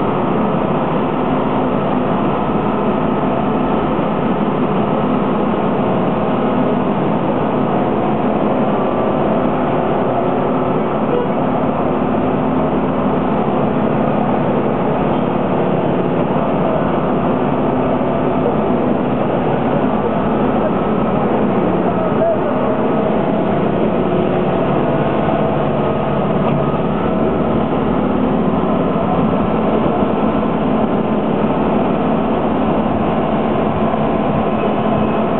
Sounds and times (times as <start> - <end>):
Vehicle: 0.0 - 35.4.